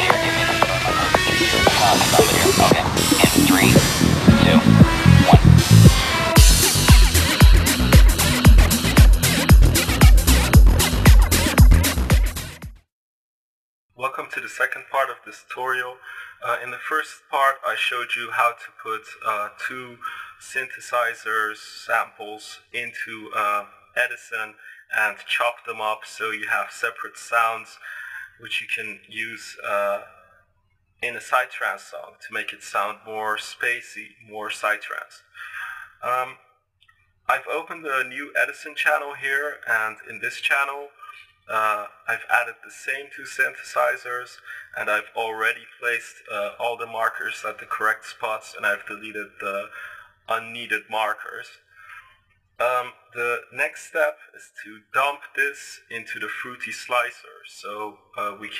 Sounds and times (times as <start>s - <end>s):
Speech: 1.4s - 5.5s, 14.0s - 30.3s, 31.0s - 36.4s, 37.3s - 58.5s.